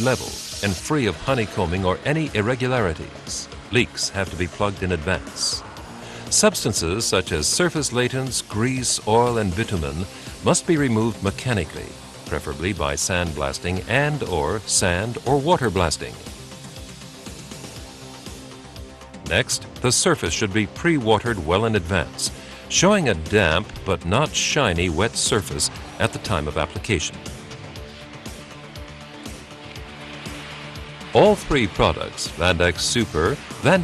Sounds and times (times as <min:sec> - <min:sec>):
Speech: 0:00.0 - 0:05.6, 0:06.3 - 0:16.2, 0:19.3 - 0:27.2, 0:31.2 - 0:33.8
Music: 0:00.0 - 0:33.8
Spray: 0:00.0 - 0:33.8.